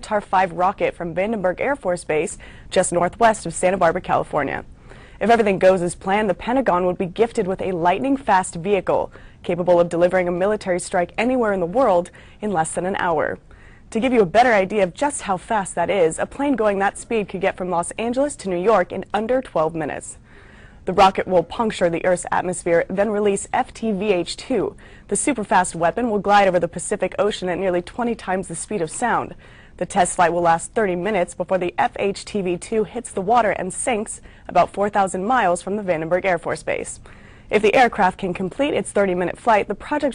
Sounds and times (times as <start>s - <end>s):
Speech: 0.0s - 20.2s, 20.9s - 40.1s.